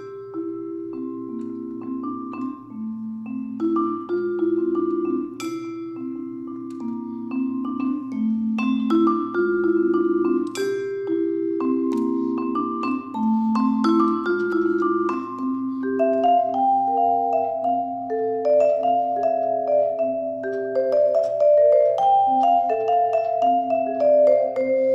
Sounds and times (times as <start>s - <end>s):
Vibraphone: 0.0s - 24.9s.